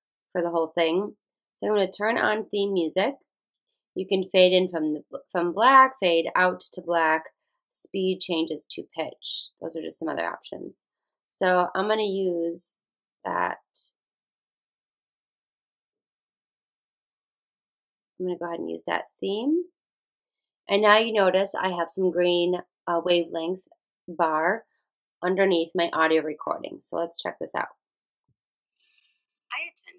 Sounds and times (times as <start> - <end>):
Speech: 0.4 - 3.2, 4.0 - 14.0, 18.2 - 19.7, 20.7 - 24.6, 25.2 - 27.7, 29.6 - 29.9.